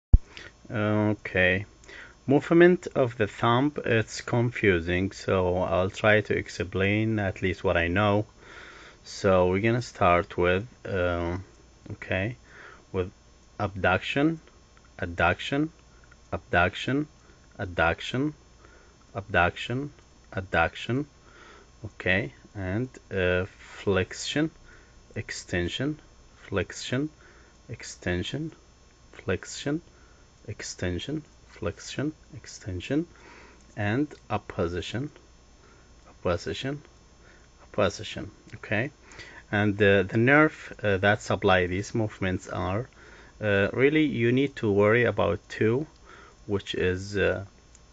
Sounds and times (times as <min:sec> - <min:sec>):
Speech: 0:00.7 - 0:08.3, 0:09.0 - 0:18.4, 0:19.1 - 0:21.1, 0:21.8 - 0:28.6, 0:29.2 - 0:33.1, 0:33.8 - 0:35.2, 0:36.1 - 0:36.9, 0:37.6 - 0:47.5.